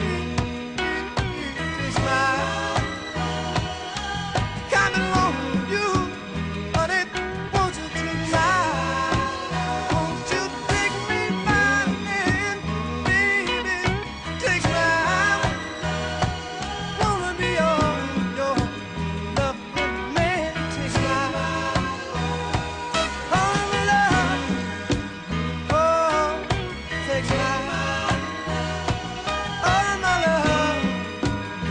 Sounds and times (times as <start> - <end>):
Middle Eastern music: 0.0 - 31.7.